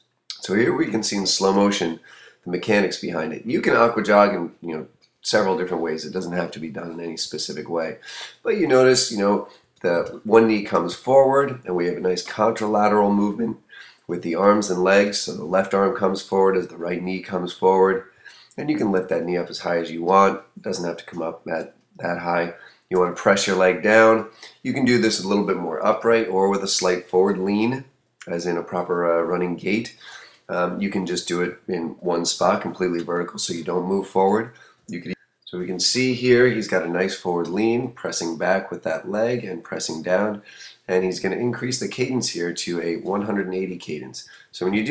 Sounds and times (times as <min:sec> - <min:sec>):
Speech: 0:00.3 - 0:44.9.